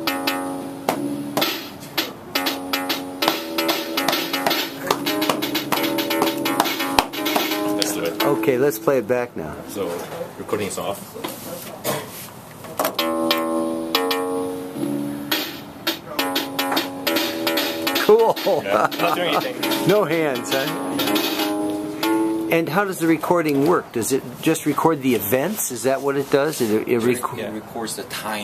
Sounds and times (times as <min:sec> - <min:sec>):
Music: 0:00.0 - 0:09.3, 0:12.9 - 0:23.8
Inside, small room: 0:00.0 - 0:28.4
Speech: 0:07.8 - 0:12.2, 0:18.0 - 0:20.8, 0:22.5 - 0:28.4.